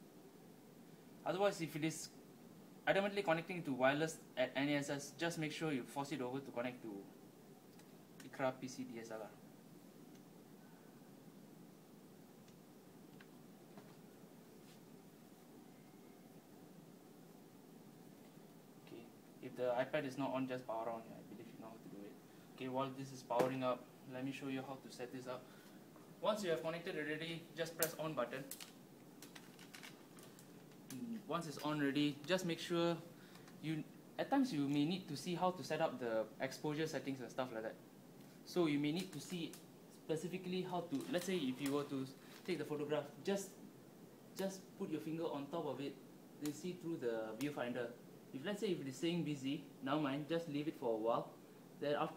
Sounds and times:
Inside, small room: 0.0 - 52.1
Speech: 1.2 - 2.2, 2.9 - 7.1, 8.2 - 9.4, 18.9 - 25.5, 26.2 - 28.6, 30.9 - 37.8, 38.5 - 43.6, 44.4 - 52.1.

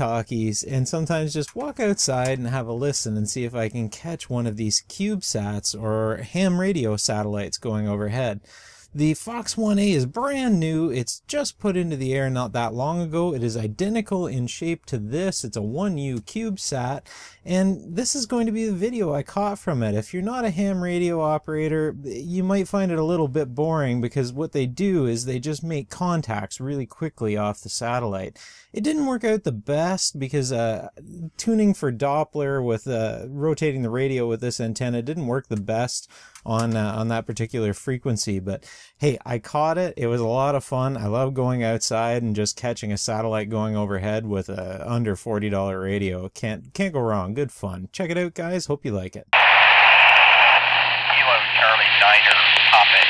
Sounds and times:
Speech: 0.0 - 53.0.

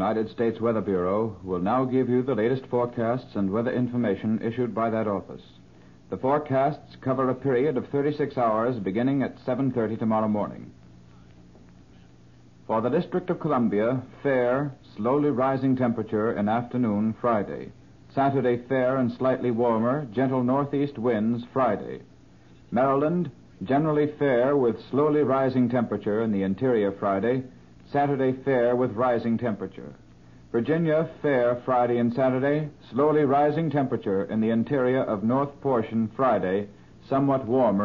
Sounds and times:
Speech: 0.0 - 10.8, 12.7 - 22.1, 22.7 - 37.8.

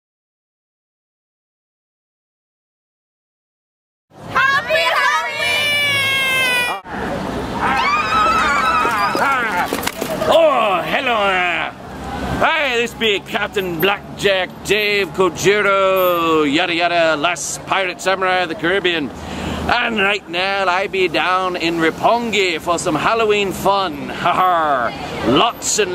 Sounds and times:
Run: 8.5 - 10.4.

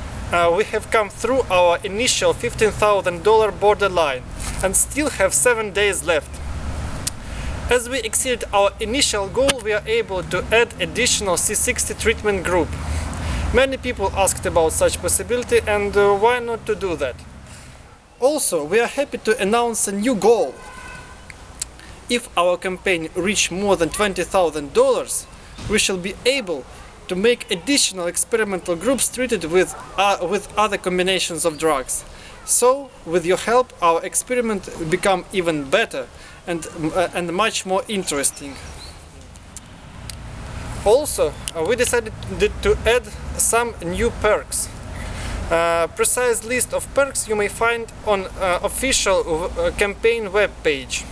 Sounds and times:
Speech: 0.3 - 6.3, 7.7 - 12.8, 13.5 - 17.2, 18.2 - 20.6, 22.1 - 38.6, 40.9 - 44.8, 45.5 - 51.1.

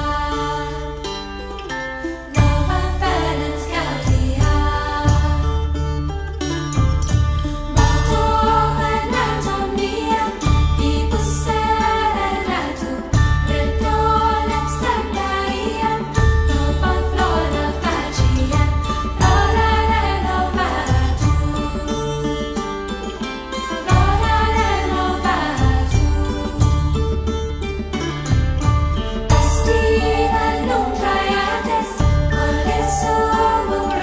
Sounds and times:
Vocal music: 0.0 - 34.0.

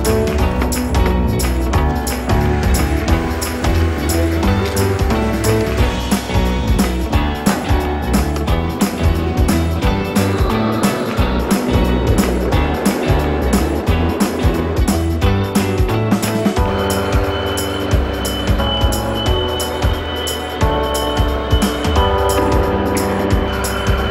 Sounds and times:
Music: 0.0 - 24.1.

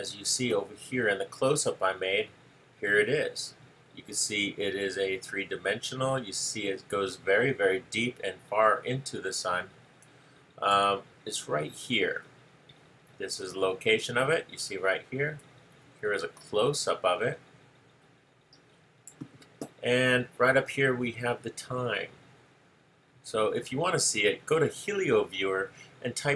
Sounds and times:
Speech: 0.0 - 9.8, 10.6 - 12.3, 13.2 - 17.4, 19.6 - 22.2, 23.3 - 26.3.

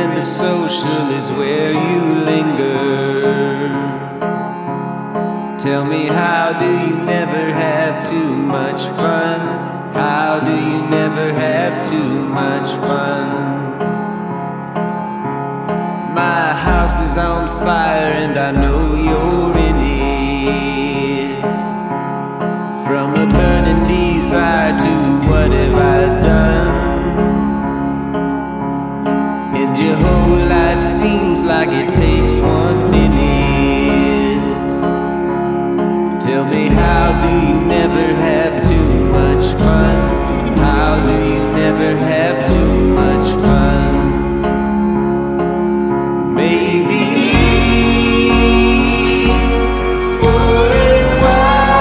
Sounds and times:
Musical instrument: 0.0 - 51.8.

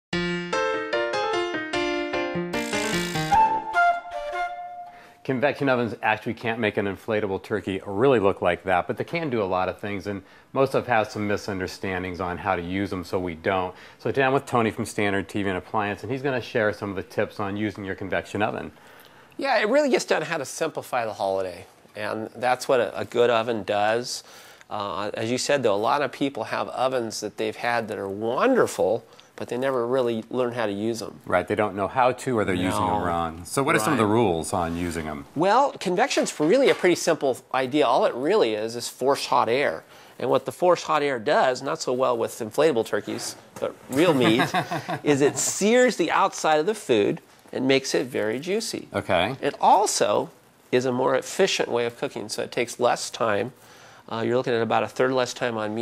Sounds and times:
Music: 0.1 - 5.3
Inside, small room: 0.1 - 55.8
Speech: 5.2 - 18.7, 19.4 - 55.8.

